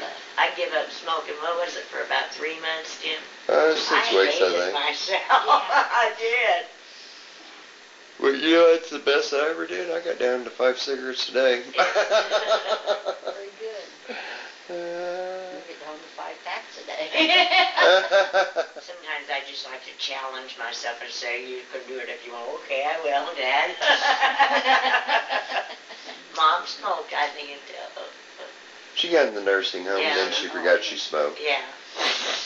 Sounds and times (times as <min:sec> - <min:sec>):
Speech: 0:00.4 - 0:06.6, 0:08.2 - 0:11.8, 0:29.0 - 0:31.8.